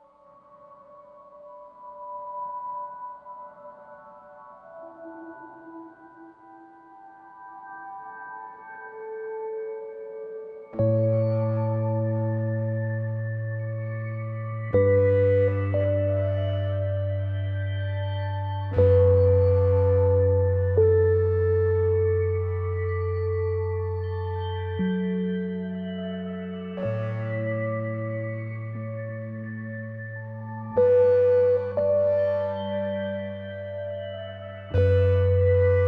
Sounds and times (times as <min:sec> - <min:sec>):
Music: 0:00.0 - 0:35.8.